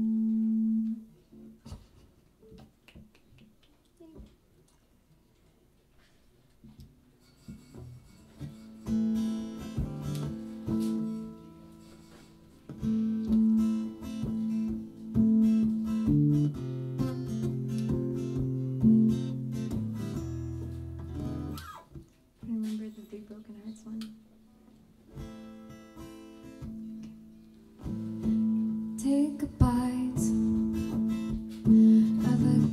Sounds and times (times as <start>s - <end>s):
Speech: 4.0s - 4.3s, 22.4s - 24.2s.